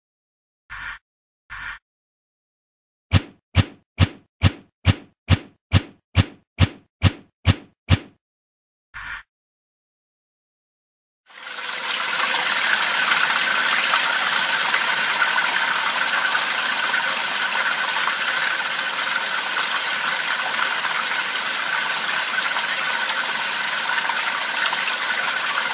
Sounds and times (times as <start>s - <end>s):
Water: 11.3s - 25.7s
Water tap, faucet: 11.3s - 25.7s.